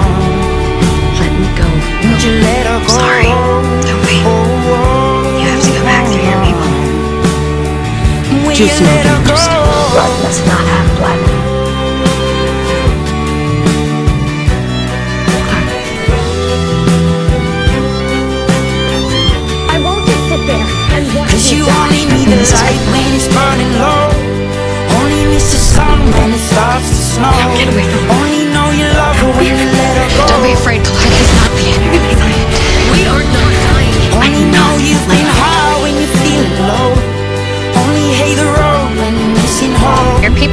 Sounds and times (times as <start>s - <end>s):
Music: 0.0s - 40.5s
Speech: 1.2s - 6.8s, 8.3s - 11.4s, 19.7s - 23.6s, 27.2s - 35.9s, 39.9s - 40.5s.